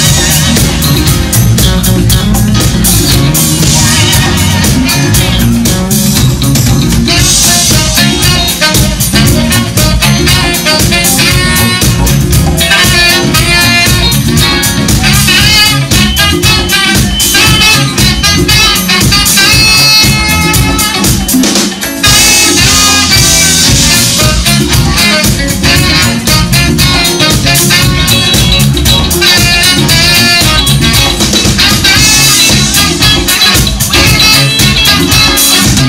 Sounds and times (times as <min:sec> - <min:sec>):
Jazz: 0:00.0 - 0:35.8.